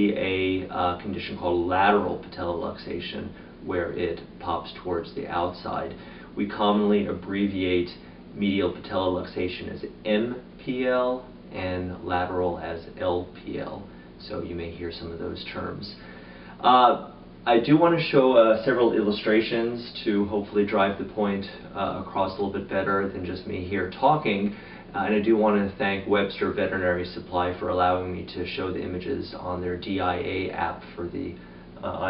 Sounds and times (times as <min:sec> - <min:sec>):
Speech: 0:00.0 - 0:32.1.